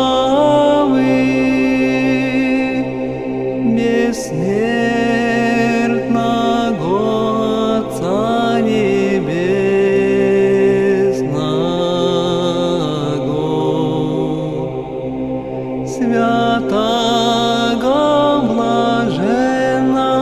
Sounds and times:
Mantra: 0.0s - 20.2s.

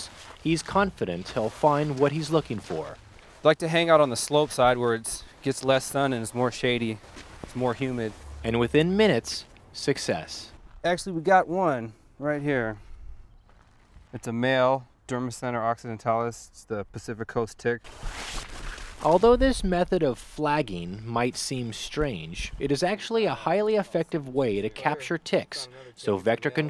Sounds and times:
Speech: 0.0s - 12.8s, 14.2s - 17.8s, 19.0s - 26.6s.

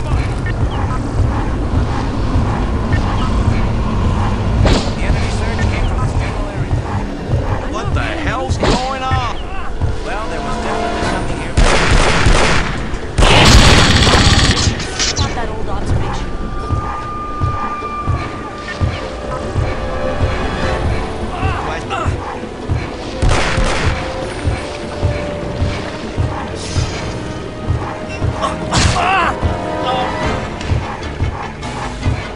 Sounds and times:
Music: 0.0s - 32.3s.

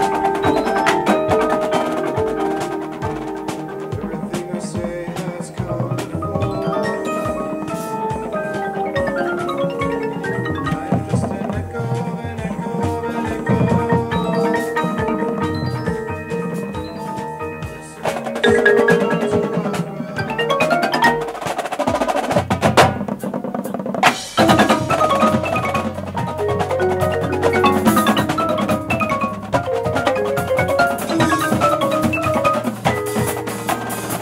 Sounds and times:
Music: 0.0s - 34.2s.

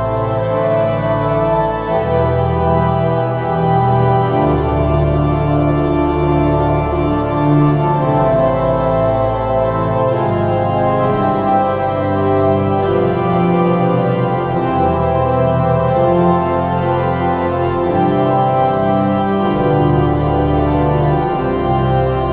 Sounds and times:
Hammond organ: 0.0s - 22.3s.

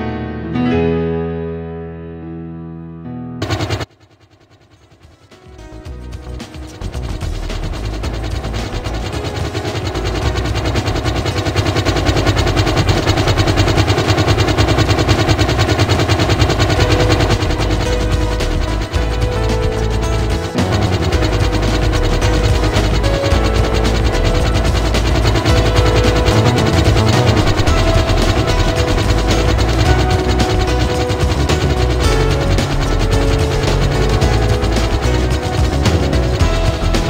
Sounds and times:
Music: 0.0s - 3.9s, 4.9s - 37.1s
Helicopter: 3.4s - 37.1s.

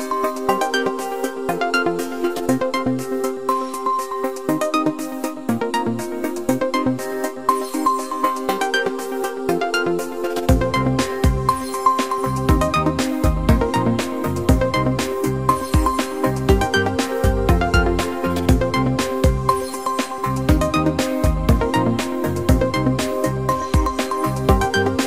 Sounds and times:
Music: 0.0s - 25.0s.

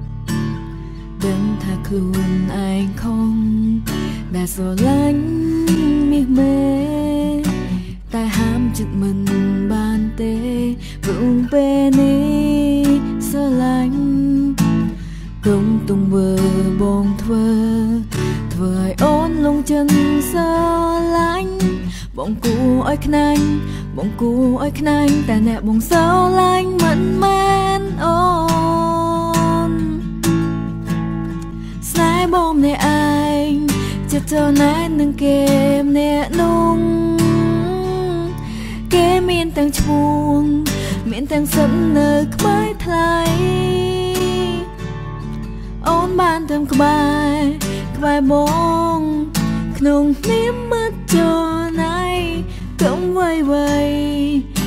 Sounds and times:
Music: 0.0s - 54.6s.

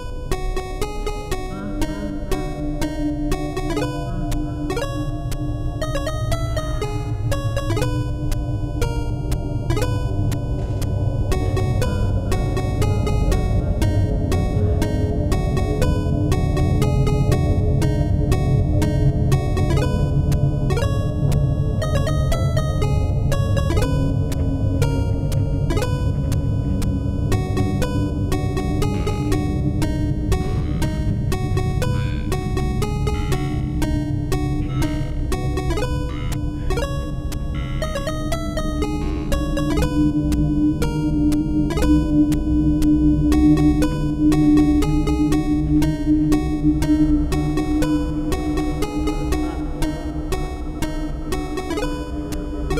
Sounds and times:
Background music: 0.0s - 52.7s
Theme music: 0.0s - 52.7s.

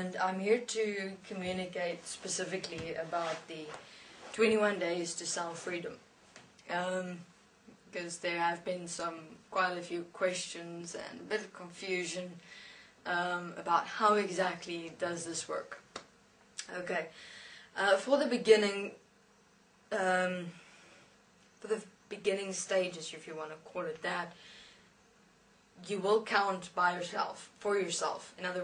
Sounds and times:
Speech: 0.0s - 6.0s, 6.6s - 7.3s, 7.9s - 15.9s, 16.6s - 17.2s, 17.8s - 19.0s, 19.9s - 20.6s, 21.6s - 24.4s, 25.8s - 28.6s.

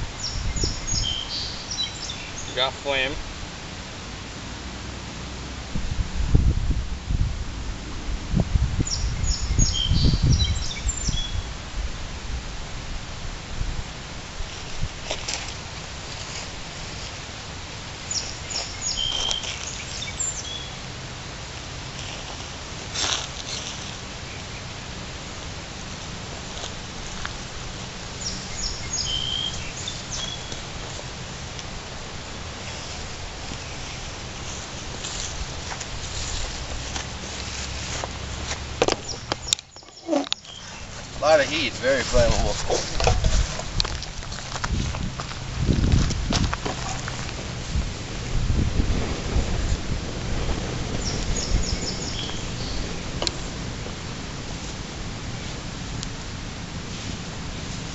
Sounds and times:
Outside, rural or natural: 0.0s - 57.9s
Speech: 2.5s - 3.2s, 41.2s - 43.0s.

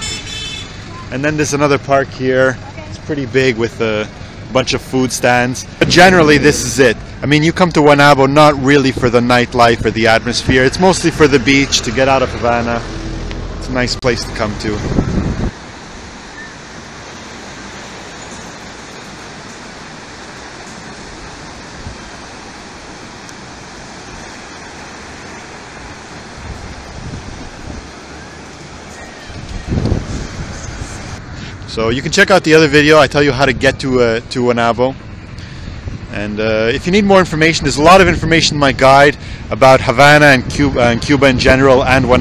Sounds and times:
Waves, surf: 0.0s - 42.2s
Wind noise (microphone): 14.7s - 15.6s, 26.4s - 28.0s, 29.3s - 32.0s, 35.4s - 42.2s.

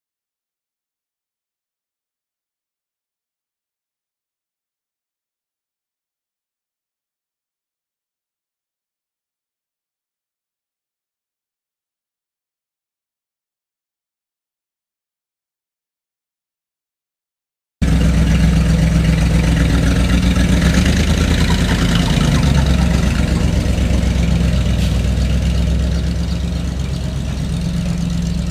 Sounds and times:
Truck: 17.8s - 28.5s.

